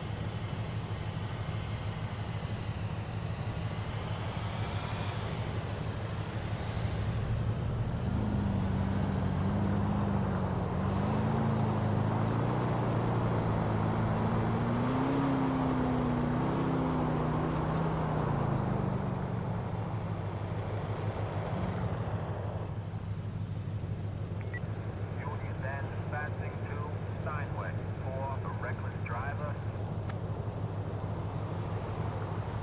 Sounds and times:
Car: 0.0 - 32.6.

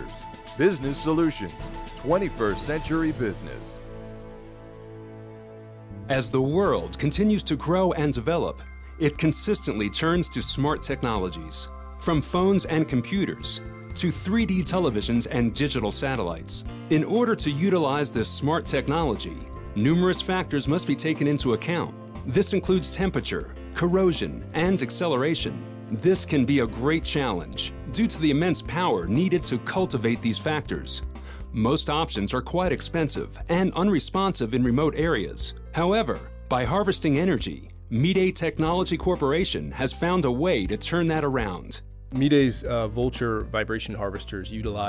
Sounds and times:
Speech: 0.0 - 3.8, 6.1 - 44.8
Music: 0.0 - 44.8.

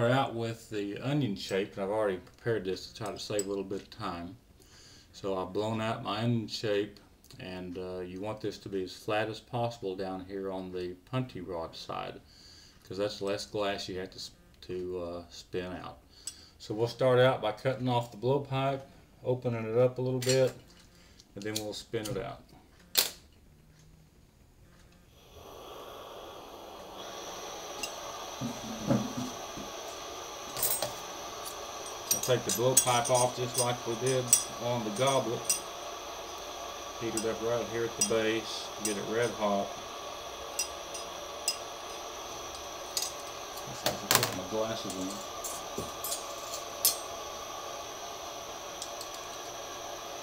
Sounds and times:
Speech: 0.0 - 4.4, 5.2 - 12.2, 12.9 - 16.0, 16.6 - 20.6, 21.4 - 22.5, 32.2 - 35.4, 37.0 - 39.8, 43.7 - 45.2.

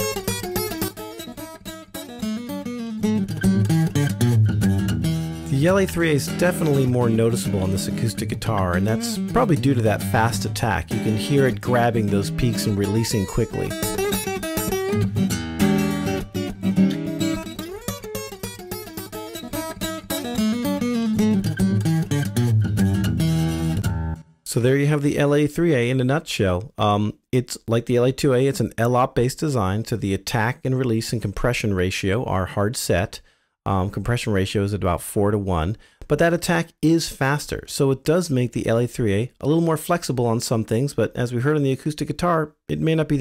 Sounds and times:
Plucked string instrument: 0.0 - 24.2.

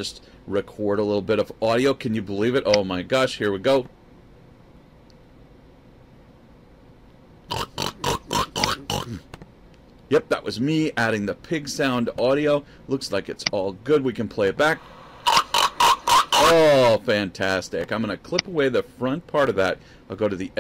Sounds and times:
Speech: 0.0 - 3.9, 10.1 - 14.8, 16.4 - 20.6.

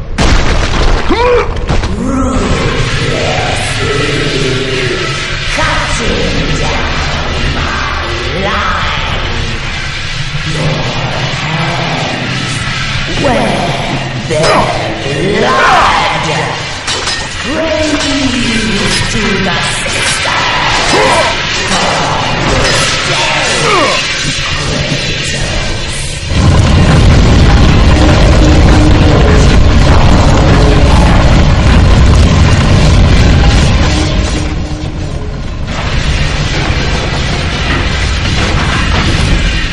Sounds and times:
Speech: 1.1 - 7.0, 7.6 - 9.6, 10.5 - 16.8, 17.4 - 24.1.

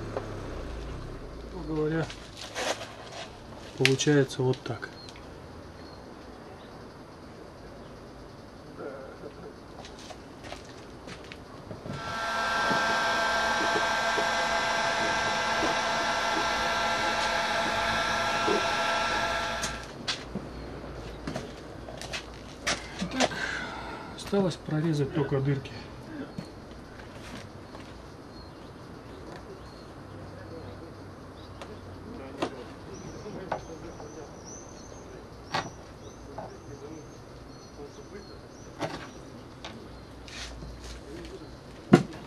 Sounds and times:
Speech: 1.5 - 2.2, 3.8 - 5.0, 24.2 - 26.3, 29.3 - 31.0, 31.6 - 34.4, 36.3 - 37.2, 37.8 - 38.5, 41.0 - 41.6.

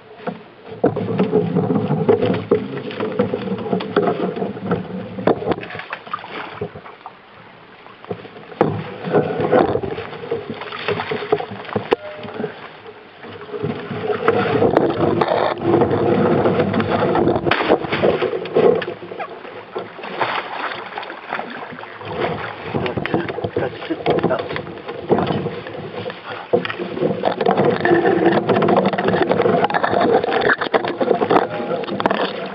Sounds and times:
Rowboat, canoe, kayak: 0.0 - 32.5
Speech: 22.8 - 24.6.

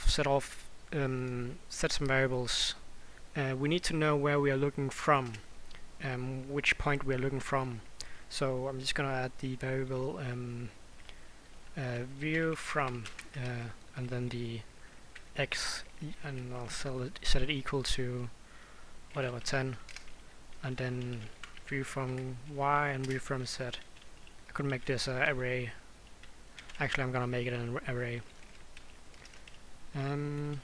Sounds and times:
Speech: 0.0 - 2.8, 3.4 - 5.4, 6.0 - 10.8, 11.8 - 14.7, 15.4 - 18.3, 19.2 - 19.8, 20.6 - 23.8, 24.5 - 25.8, 26.8 - 28.3, 29.9 - 30.6.

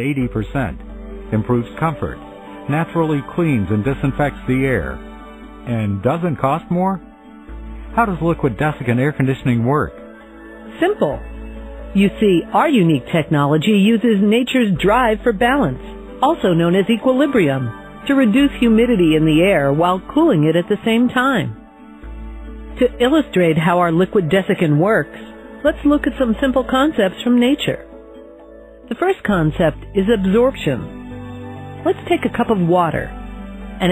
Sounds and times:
Speech: 0.0 - 5.0, 5.7 - 7.0, 8.0 - 9.9, 10.8 - 11.2, 12.0 - 21.6, 22.8 - 27.8, 28.9 - 30.9, 31.9 - 33.1
Music: 0.0 - 33.9.

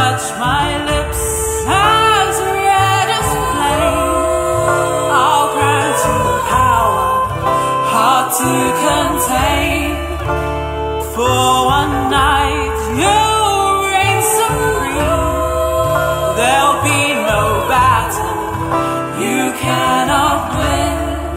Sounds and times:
Music: 0.0 - 21.3
Singing: 0.0 - 21.3.

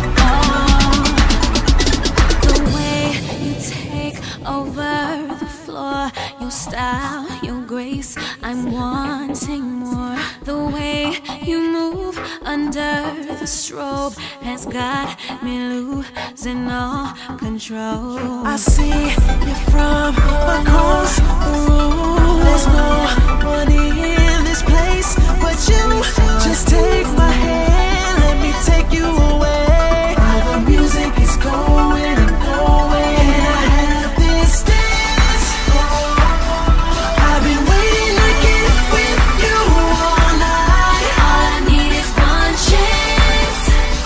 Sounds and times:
Soundtrack music: 0.0 - 6.3, 18.7 - 44.0
Background music: 0.0 - 44.0.

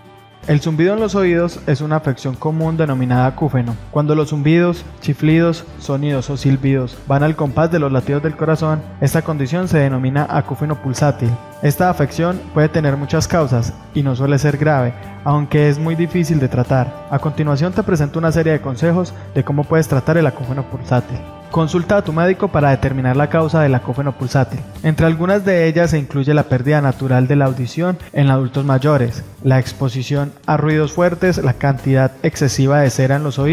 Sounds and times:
Music: 0.0 - 33.5
Speech: 0.4 - 33.5.

